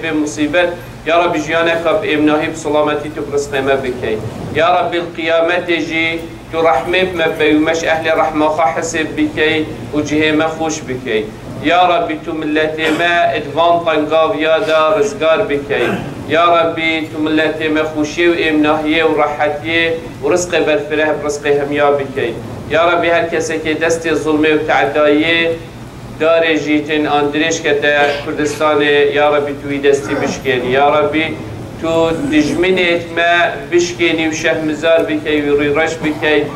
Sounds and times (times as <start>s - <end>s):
Male speech, man speaking: 0.0s - 25.6s, 26.2s - 36.5s
Narration, monologue: 0.0s - 36.5s.